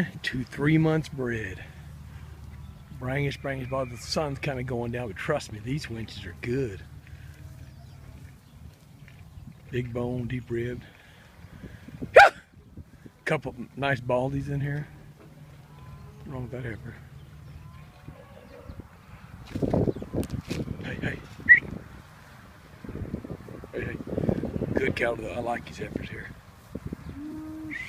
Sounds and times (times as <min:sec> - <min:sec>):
Speech: 0:00.0 - 0:01.7, 0:03.0 - 0:06.8, 0:09.7 - 0:10.9, 0:13.3 - 0:14.9, 0:16.3 - 0:17.0, 0:23.7 - 0:24.0, 0:24.7 - 0:26.4.